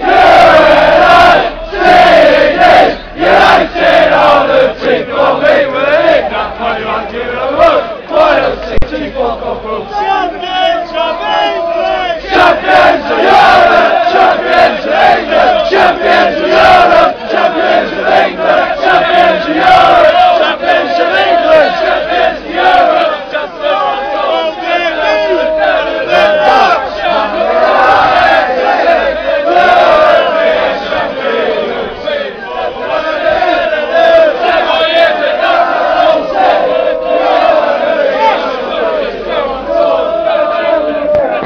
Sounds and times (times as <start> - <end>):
Speech: 6.2 - 12.8, 37.8 - 41.4.